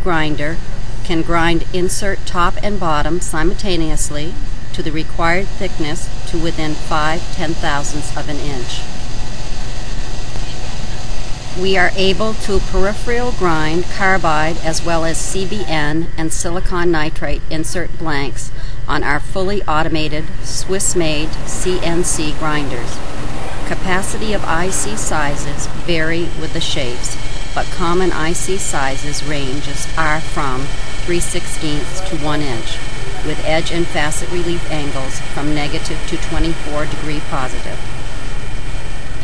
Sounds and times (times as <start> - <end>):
Speech: 0.0 - 8.8, 11.6 - 23.0, 23.7 - 37.8.